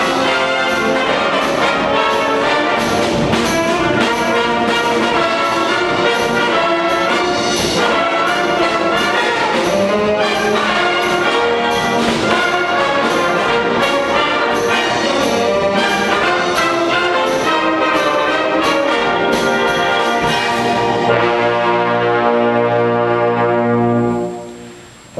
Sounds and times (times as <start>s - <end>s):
Clarinet: 0.0s - 25.1s
Orchestra: 0.0s - 25.1s
Trumpet: 0.0s - 25.1s.